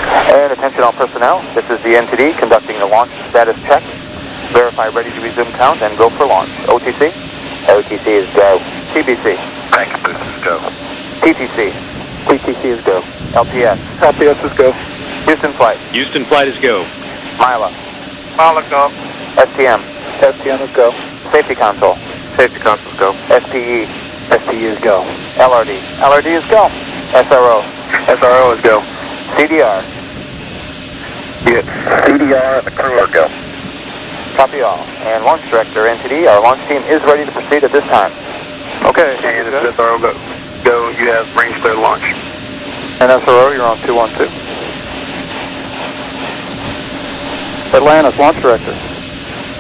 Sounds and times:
Speech: 0.3 - 3.9, 4.5 - 17.8, 18.4 - 29.9, 31.4 - 33.4, 34.4 - 38.2, 38.8 - 42.2, 43.0 - 44.4, 47.7 - 48.8.

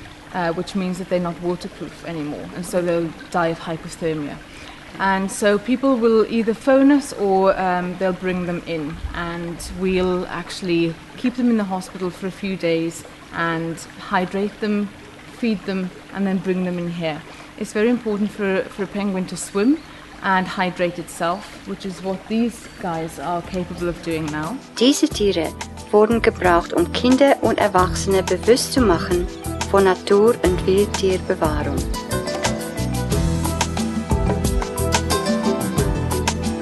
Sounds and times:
Speech: 0.4 - 4.4, 5.0 - 31.8.

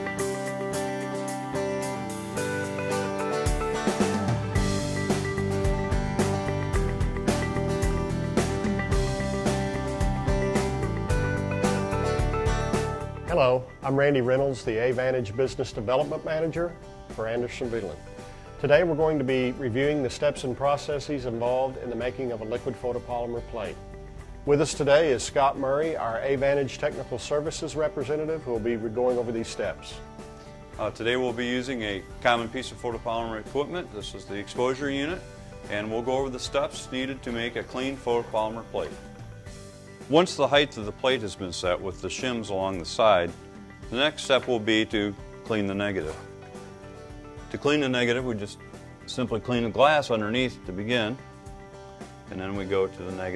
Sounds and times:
Music: 0.0 - 53.3
Speech: 13.3 - 18.0, 18.6 - 23.8, 24.5 - 30.0, 30.8 - 39.0, 40.1 - 46.3, 47.5 - 51.2, 52.3 - 53.3.

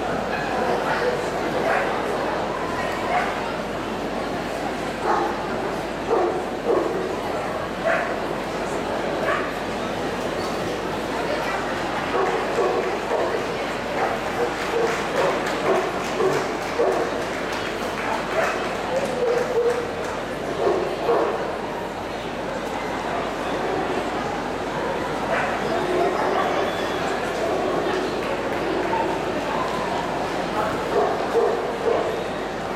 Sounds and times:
Speech: 0.0 - 32.7
Bow-wow: 6.1 - 7.0, 7.8 - 8.2, 9.2 - 9.5, 12.1 - 13.3, 14.0 - 17.1, 18.4 - 19.9, 20.6 - 21.4, 30.9 - 32.2.

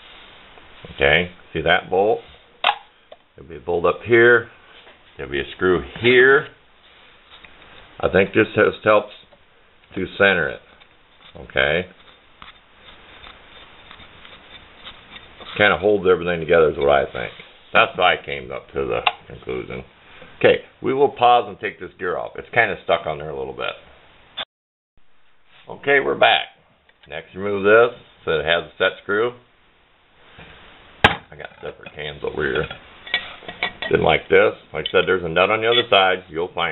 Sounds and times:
Inside, small room: 0.0 - 36.7
Speech: 0.9 - 2.3, 3.4 - 4.6, 5.2 - 6.6, 8.0 - 9.3, 9.9 - 10.7, 11.3 - 12.0, 15.6 - 23.9, 25.6 - 29.5, 31.2 - 32.8, 33.8 - 36.7.

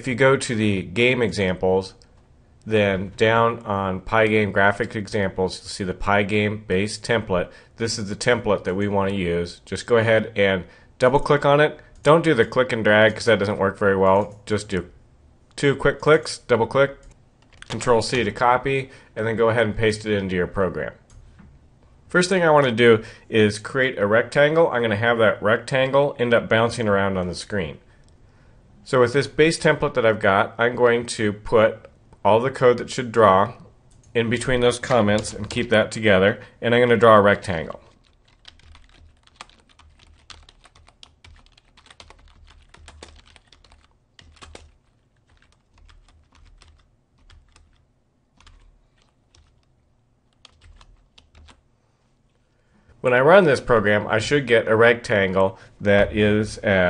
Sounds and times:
Speech: 0.0 - 2.0, 2.6 - 15.0, 15.6 - 17.1, 17.7 - 21.1, 22.1 - 27.9, 28.8 - 37.9, 53.0 - 56.8
Typing: 17.0 - 18.0, 38.0 - 47.8, 48.4 - 49.7, 50.3 - 51.6.

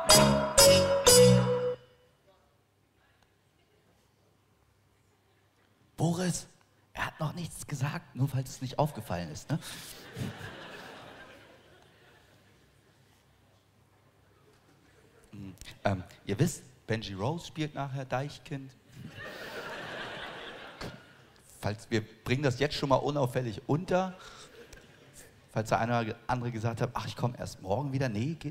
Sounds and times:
Speech: 5.2 - 9.8, 14.8 - 18.8, 21.5 - 24.2, 25.2 - 28.5.

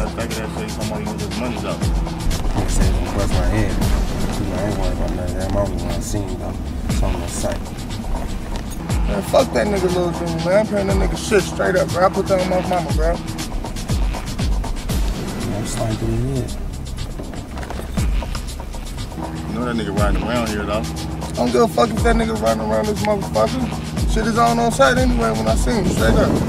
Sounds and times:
Speech: 0.0 - 1.8, 2.6 - 7.6, 9.1 - 13.2, 15.5 - 16.6, 19.5 - 26.4
Music: 0.0 - 26.4.

